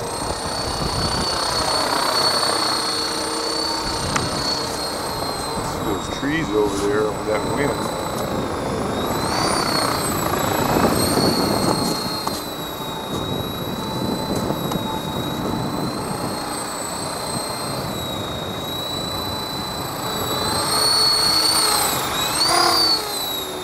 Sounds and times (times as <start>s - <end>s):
Helicopter: 0.0s - 23.6s
Speech: 5.8s - 8.0s.